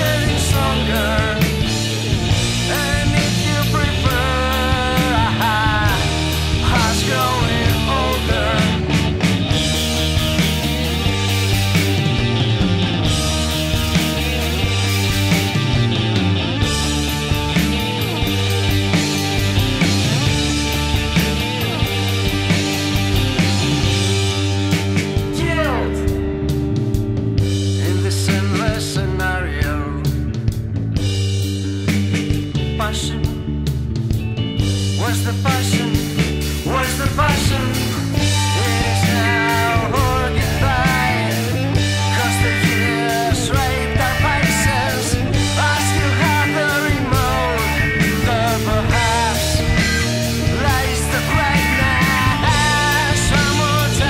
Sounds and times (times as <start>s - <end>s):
Grunge: 0.0s - 54.0s.